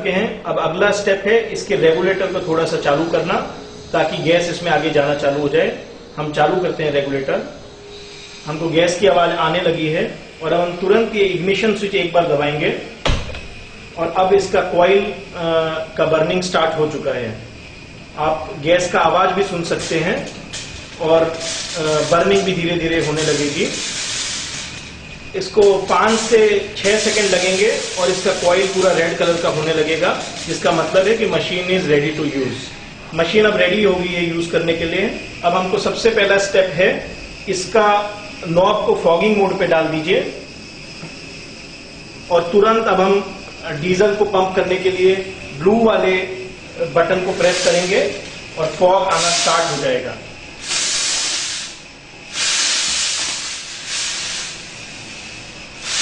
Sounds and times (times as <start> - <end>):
Speech: 0.0 - 7.6, 8.5 - 12.9, 14.0 - 17.4, 18.2 - 20.4, 21.0 - 23.8, 25.4 - 40.4, 42.3 - 50.3.